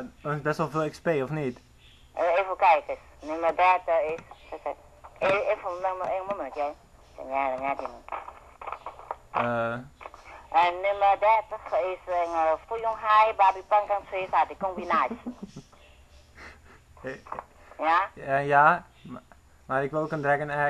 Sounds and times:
Radio: 2.2s - 15.5s
Speech: 5.2s - 8.0s, 10.6s - 15.2s, 17.8s - 20.7s.

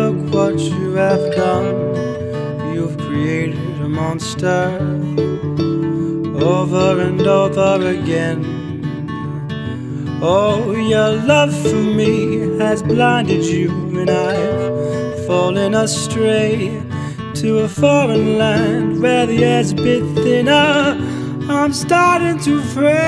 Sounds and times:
Music: 0.0s - 23.0s.

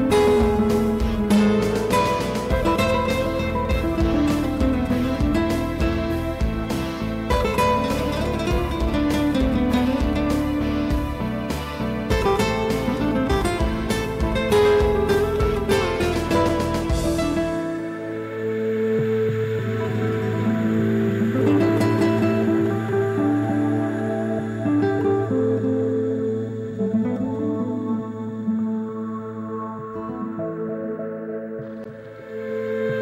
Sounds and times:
Music: 0.0s - 33.0s.

